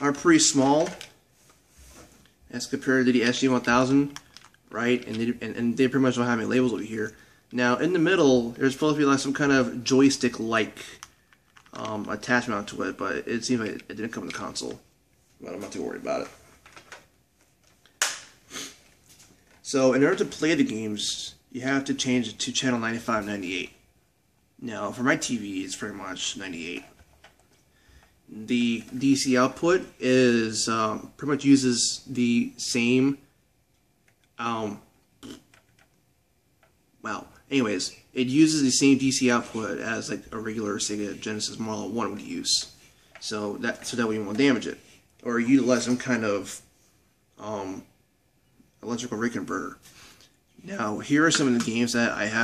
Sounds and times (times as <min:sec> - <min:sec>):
Speech: 0:00.0 - 0:01.2, 0:02.5 - 0:11.0, 0:11.7 - 0:14.8, 0:15.4 - 0:16.4, 0:19.6 - 0:23.8, 0:24.6 - 0:26.9, 0:28.3 - 0:33.2, 0:34.4 - 0:35.4, 0:37.0 - 0:46.7, 0:47.4 - 0:47.9, 0:48.8 - 0:49.8, 0:50.6 - 0:52.4
Inside, small room: 0:00.0 - 0:52.4.